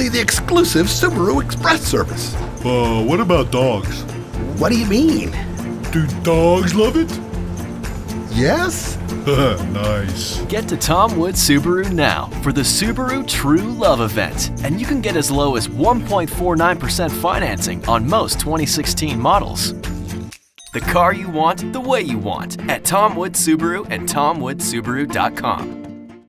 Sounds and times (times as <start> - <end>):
Speech: 0.0 - 5.4, 6.0 - 7.2, 8.3 - 19.7, 20.8 - 25.7
Music: 0.0 - 26.2.